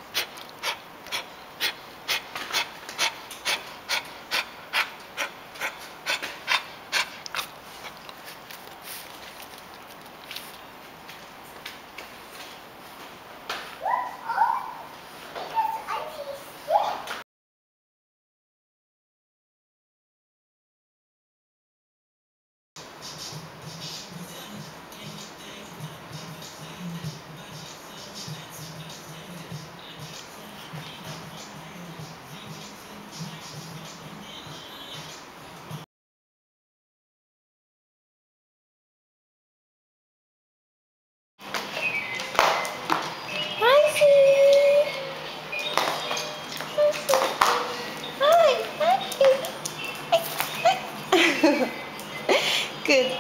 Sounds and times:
Dog: 0.1 - 10.1, 13.8 - 14.9
Speech: 13.8 - 17.2, 43.6 - 45.2, 46.7 - 49.6, 52.8 - 53.2.

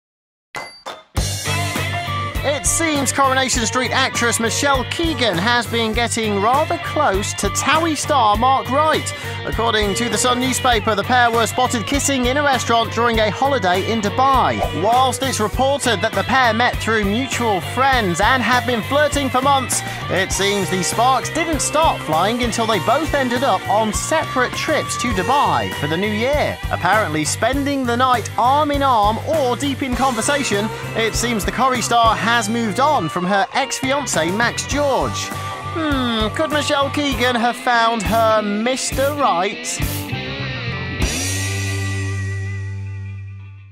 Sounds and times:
Music: 0.6 - 43.7
Speech: 2.4 - 39.9.

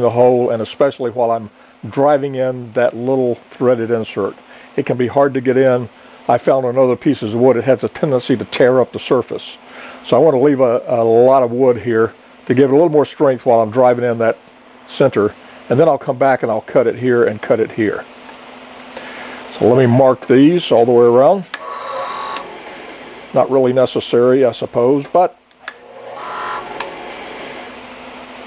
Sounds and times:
Speech: 0.0 - 18.1, 19.5 - 21.5, 23.4 - 25.4.

